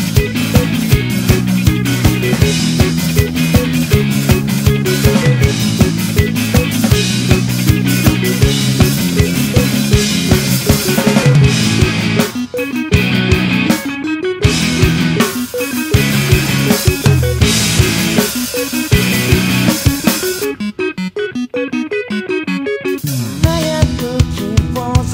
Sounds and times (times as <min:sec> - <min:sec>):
Music: 0:00.0 - 0:25.1.